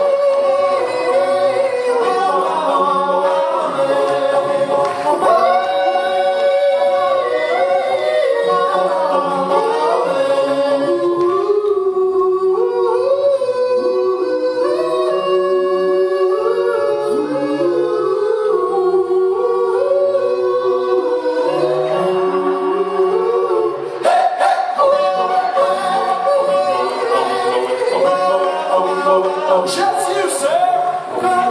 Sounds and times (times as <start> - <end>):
Inside, large room or hall: 0.0 - 31.5.